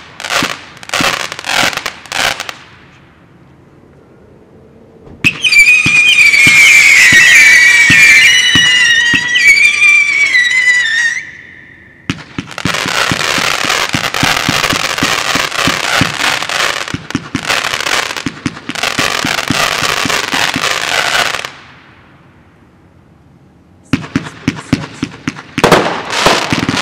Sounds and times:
Fireworks: 0:00.0 - 0:03.0, 0:05.2 - 0:22.2, 0:23.8 - 0:26.8.

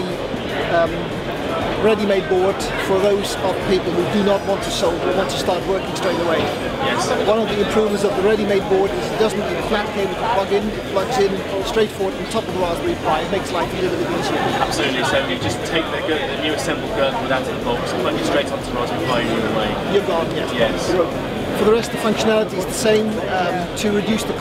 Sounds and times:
Music: 0:00.0 - 0:24.4
Speech: 0:00.0 - 0:24.4.

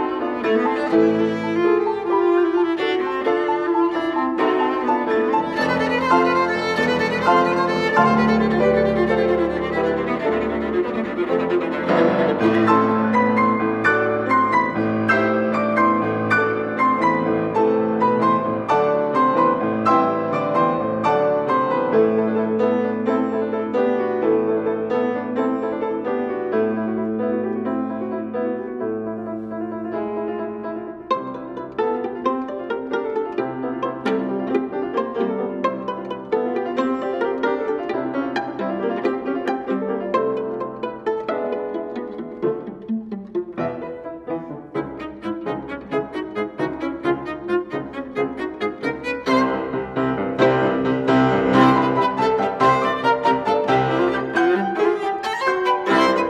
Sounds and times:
Cello: 0:00.0 - 0:56.2
Piano: 0:00.0 - 0:56.2
Violin, fiddle: 0:00.0 - 0:56.2.

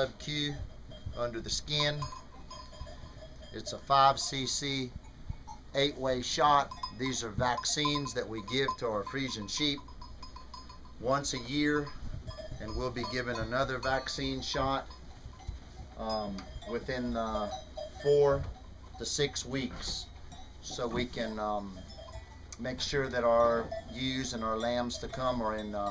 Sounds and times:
Speech: 0:00.0 - 0:00.6, 0:01.2 - 0:02.1, 0:03.6 - 0:04.9, 0:05.8 - 0:09.8, 0:11.0 - 0:12.0, 0:12.6 - 0:14.9, 0:16.0 - 0:21.8, 0:22.6 - 0:25.9.

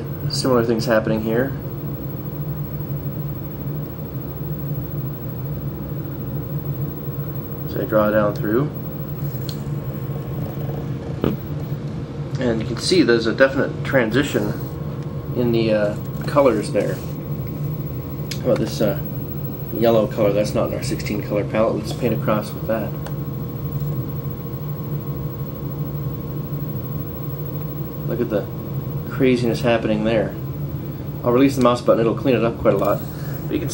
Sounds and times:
Inside, small room: 0:00.0 - 0:33.7
Speech: 0:00.3 - 0:01.6, 0:07.7 - 0:08.8, 0:12.4 - 0:14.6, 0:15.4 - 0:17.0, 0:18.4 - 0:19.0, 0:19.7 - 0:23.0, 0:28.1 - 0:28.5, 0:29.1 - 0:30.4, 0:31.2 - 0:33.7.

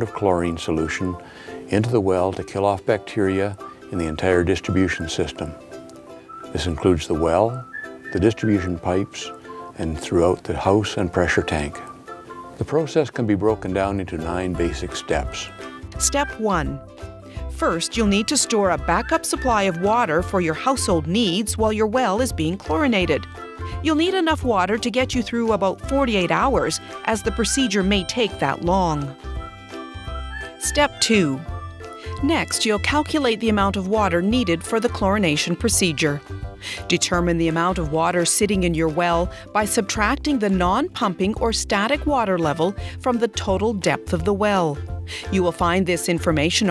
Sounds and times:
Speech: 0:00.0 - 0:05.6, 0:06.6 - 0:07.6, 0:08.2 - 0:11.9, 0:12.6 - 0:16.8, 0:17.6 - 0:23.2, 0:23.8 - 0:29.1, 0:32.2 - 0:36.2, 0:36.9 - 0:46.7
Music: 0:00.0 - 0:46.7.

